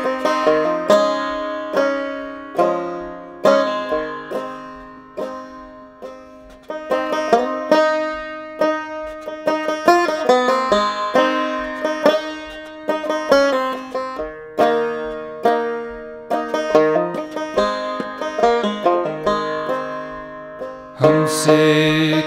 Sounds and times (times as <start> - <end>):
Banjo: 0.0 - 22.2.